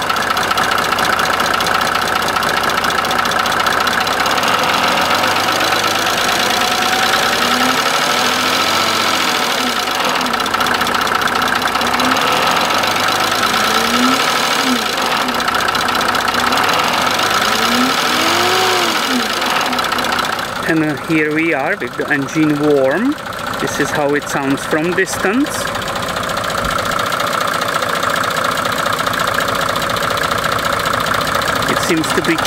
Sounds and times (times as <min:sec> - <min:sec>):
Engine: 0:00.0 - 0:32.4
Speech: 0:20.6 - 0:25.7, 0:31.7 - 0:32.4.